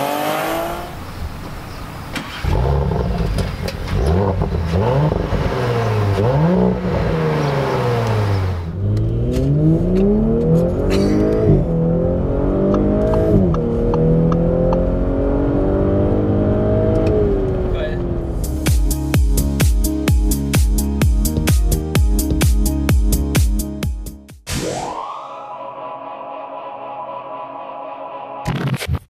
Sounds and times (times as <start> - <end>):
Music: 18.4 - 29.1.